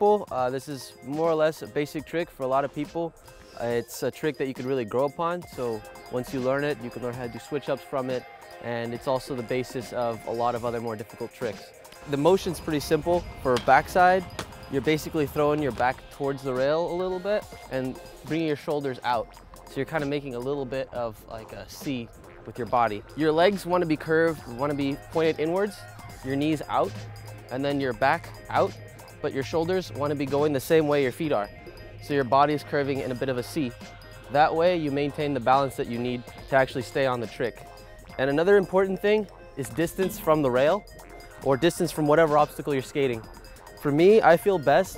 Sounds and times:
Speech: 0.0s - 14.2s, 14.8s - 19.2s, 19.8s - 26.9s, 27.5s - 31.5s, 32.1s - 37.5s, 38.2s - 40.8s, 41.4s - 43.2s, 43.8s - 44.9s
Music: 0.0s - 44.9s.

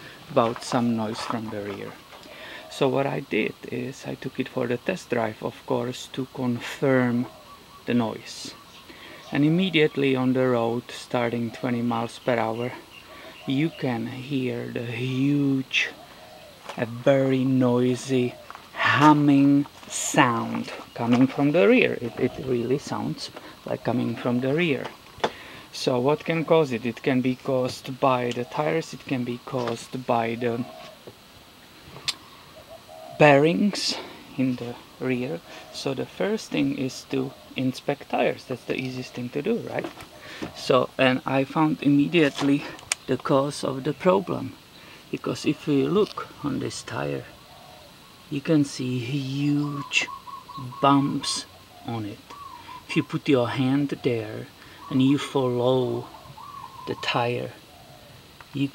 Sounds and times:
Speech: 0.0s - 2.0s, 2.6s - 8.6s, 9.2s - 16.0s, 16.7s - 25.0s, 25.7s - 30.9s, 33.2s - 47.4s, 48.3s - 56.2s, 56.9s - 57.6s, 58.5s - 58.7s.

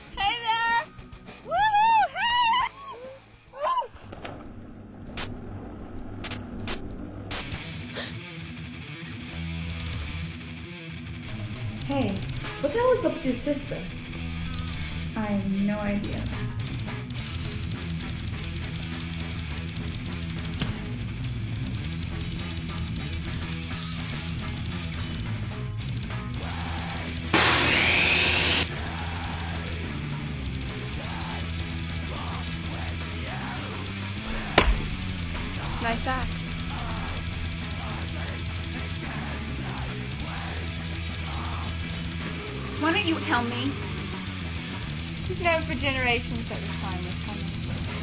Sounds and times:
Music: 0.0s - 48.0s
Speech: 11.8s - 13.9s, 15.2s - 16.4s, 35.7s - 36.3s, 42.8s - 43.8s, 45.3s - 47.6s.

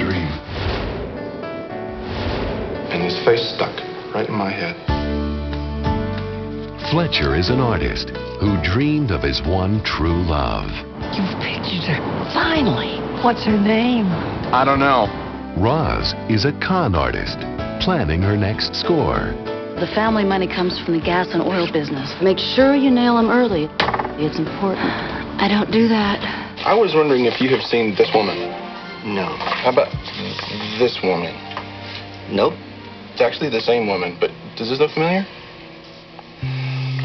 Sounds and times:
Music: 0.0s - 37.0s.

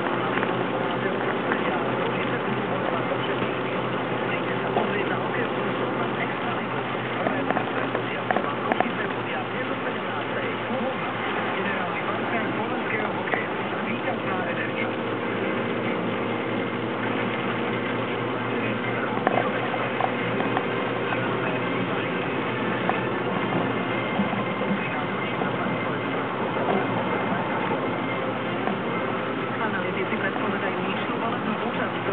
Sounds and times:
Car: 0.0s - 32.1s
Speech: 0.0s - 32.1s.

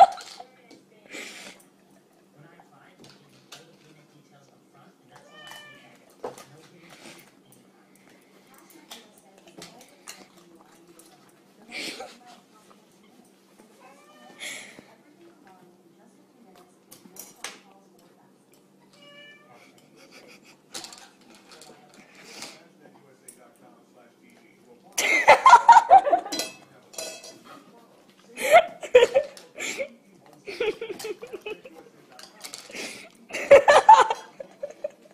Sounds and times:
Snicker: 0.0s - 0.4s, 25.0s - 26.4s, 28.4s - 29.9s, 30.5s - 31.8s, 33.3s - 35.1s.

